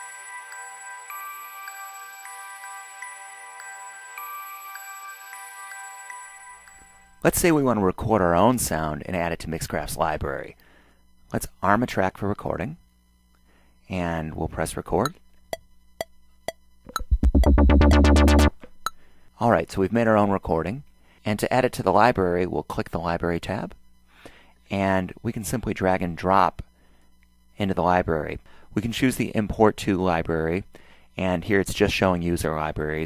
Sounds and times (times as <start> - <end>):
Speech: 7.2 - 10.6, 11.3 - 12.8, 13.9 - 15.2, 19.4 - 23.8, 24.7 - 26.7, 27.6 - 33.0.